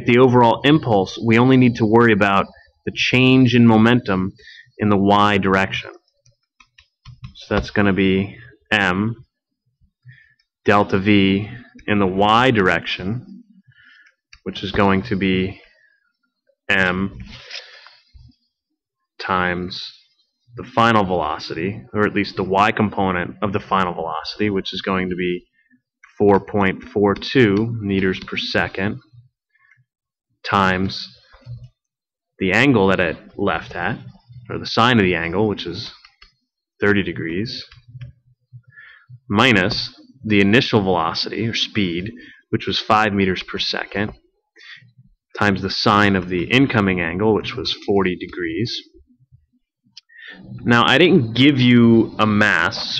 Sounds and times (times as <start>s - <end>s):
Speech: 0.0s - 6.1s, 7.3s - 9.4s, 10.7s - 13.4s, 14.4s - 15.8s, 16.7s - 17.4s, 19.2s - 25.5s, 26.1s - 29.1s, 30.4s - 31.3s, 32.4s - 36.1s, 36.8s - 37.9s, 39.3s - 49.0s, 50.0s - 52.9s.